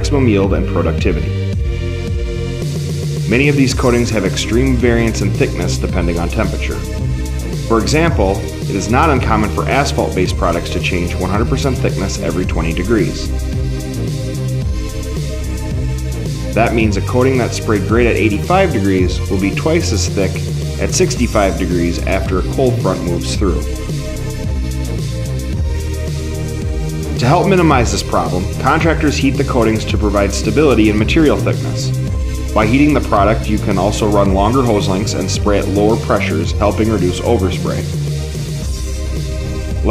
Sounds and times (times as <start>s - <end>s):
Speech: 0.0s - 1.4s, 3.3s - 7.0s, 7.7s - 13.3s, 16.6s - 23.8s, 27.1s - 38.0s
Music: 0.0s - 39.9s.